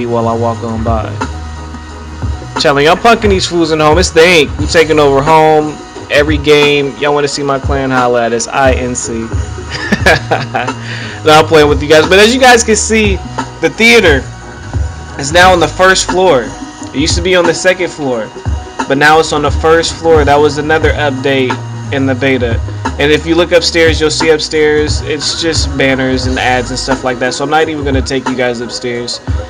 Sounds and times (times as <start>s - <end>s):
Speech: 0.0s - 1.2s, 2.6s - 9.3s, 11.2s - 14.3s, 15.2s - 29.2s
Music: 0.0s - 29.5s.